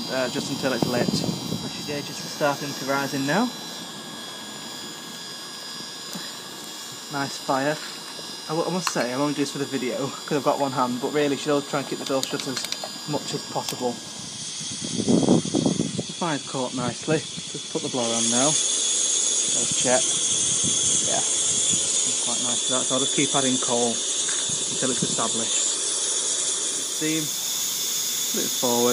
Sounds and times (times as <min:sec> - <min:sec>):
Speech: 0:00.0 - 0:03.5, 0:07.1 - 0:07.8, 0:08.5 - 0:14.0, 0:16.2 - 0:18.6, 0:19.5 - 0:20.1, 0:21.0 - 0:21.3, 0:22.1 - 0:24.0, 0:24.8 - 0:25.6, 0:27.0 - 0:27.3, 0:28.4 - 0:28.9
Engine: 0:00.0 - 0:28.9.